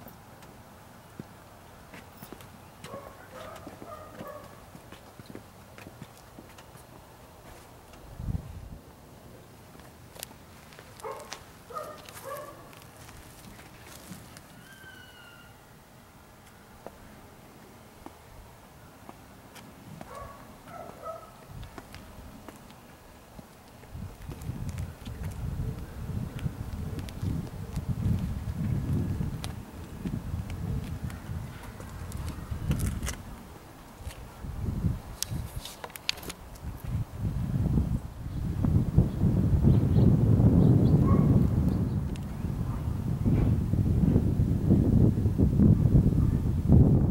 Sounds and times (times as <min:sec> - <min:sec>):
Outside, rural or natural: 0:00.0 - 0:47.1.